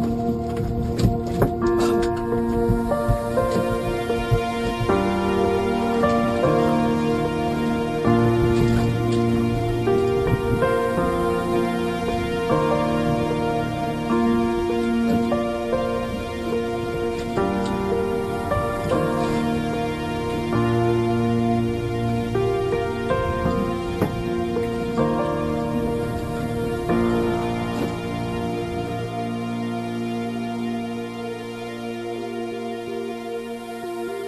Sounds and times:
New-age music: 0.0s - 34.2s.

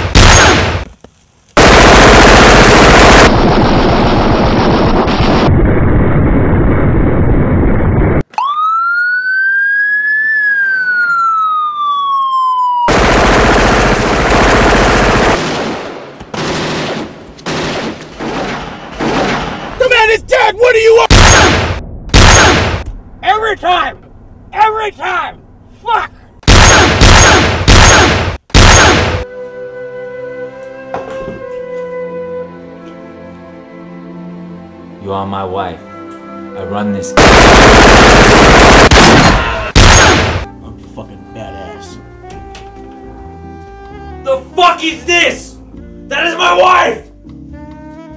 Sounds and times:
Police car (siren): 8.3s - 12.9s.

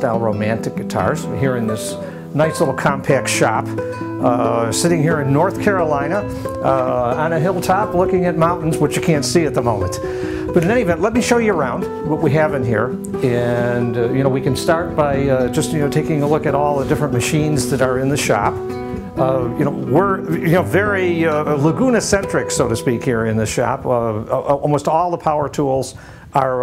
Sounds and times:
Speech: 0.0s - 10.0s, 10.6s - 18.6s, 19.2s - 26.6s
Acoustic guitar: 0.0s - 26.6s.

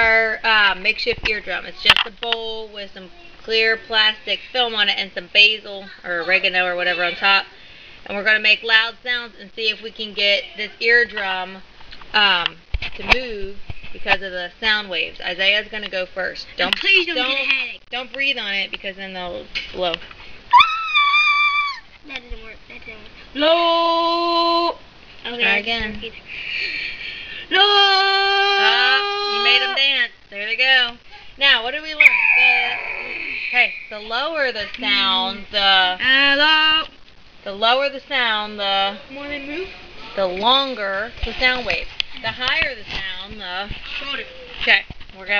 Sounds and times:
Speech: 27.5s - 32.9s.

